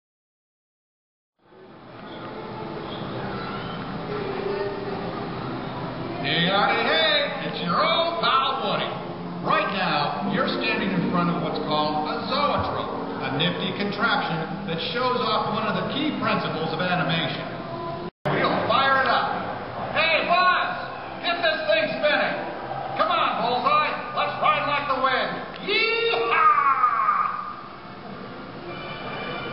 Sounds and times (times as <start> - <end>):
Speech: 6.2 - 17.5, 18.3 - 19.4, 20.0 - 22.4, 23.0 - 27.4.